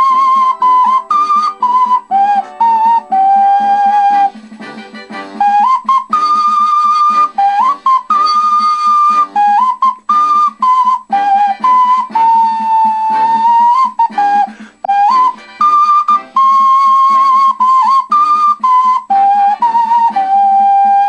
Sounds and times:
Flute: 0.0 - 21.0
Inside, small room: 0.0 - 21.0.

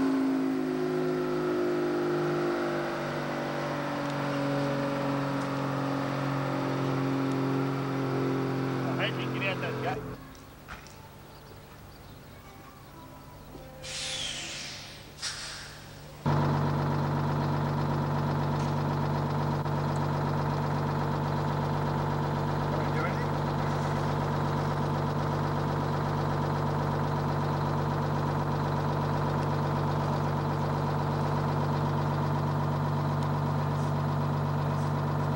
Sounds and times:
Speech: 8.8 - 10.2, 22.7 - 23.4.

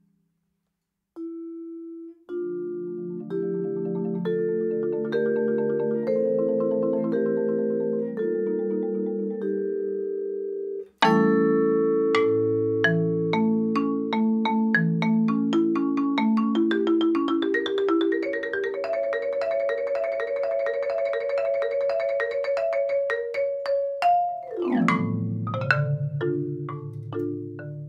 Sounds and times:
Marimba, xylophone: 1.2 - 27.8
Vibraphone: 1.2 - 27.8.

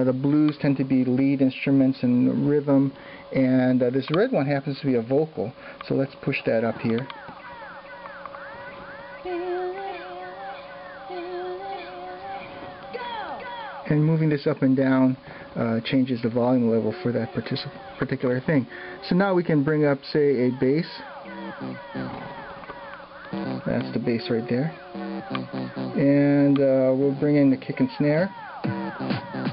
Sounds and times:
Speech: 0.0 - 7.1, 13.9 - 21.1, 23.7 - 24.8, 26.0 - 28.3
Inside, small room: 0.0 - 29.5.

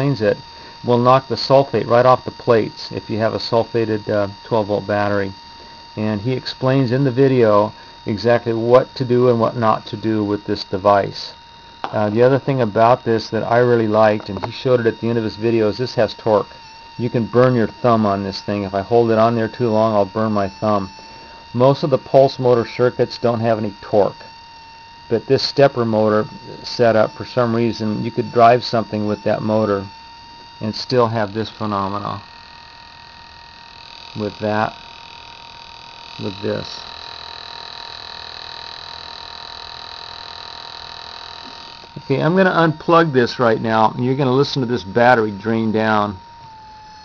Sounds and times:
Speech: 0.0 - 5.4, 6.0 - 20.9, 21.6 - 24.2, 25.1 - 29.9, 30.6 - 32.2, 34.2 - 34.8, 36.2 - 36.8, 42.0 - 46.2.

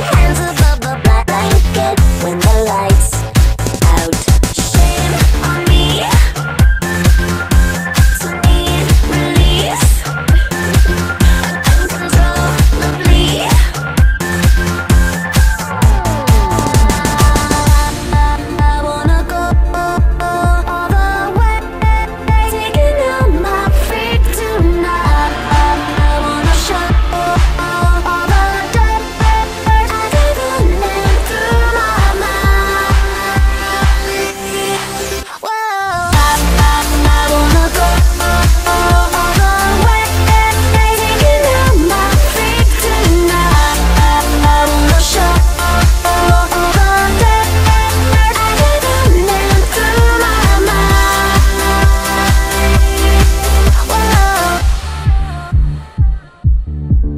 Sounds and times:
Singing: 0.0 - 3.2, 3.8 - 56.7
Electronic music: 0.0 - 57.1
Pop music: 0.0 - 57.1.

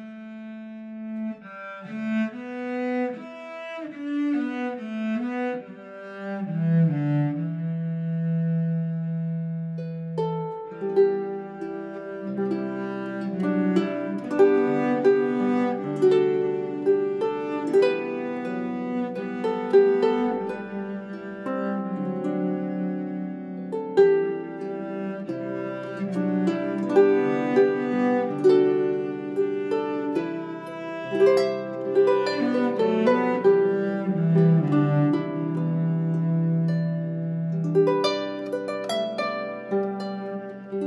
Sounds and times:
Cello: 0.0 - 40.8.

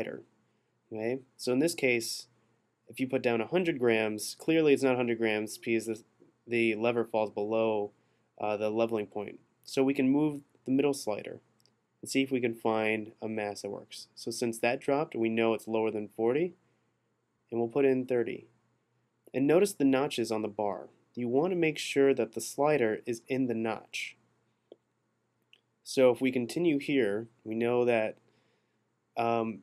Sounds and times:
Speech: 0.0 - 0.2, 0.9 - 2.2, 2.9 - 11.4, 12.0 - 16.6, 17.5 - 18.4, 19.3 - 24.1, 25.9 - 28.2, 29.2 - 29.6.

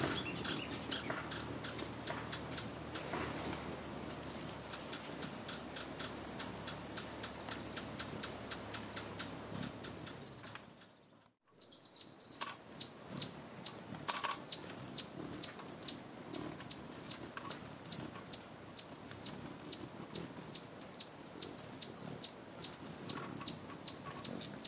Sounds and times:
Bird: 0.0 - 24.6.

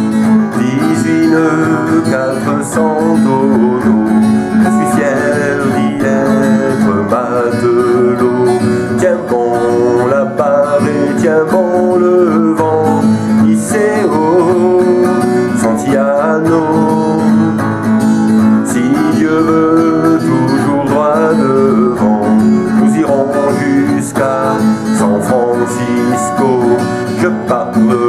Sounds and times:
Acoustic guitar: 0.0 - 28.0.

